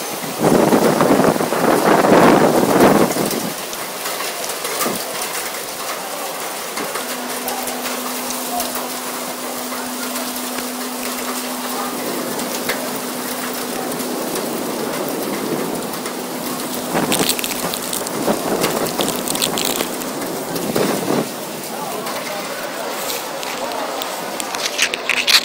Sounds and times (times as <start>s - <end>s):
Wind: 0.0s - 25.4s.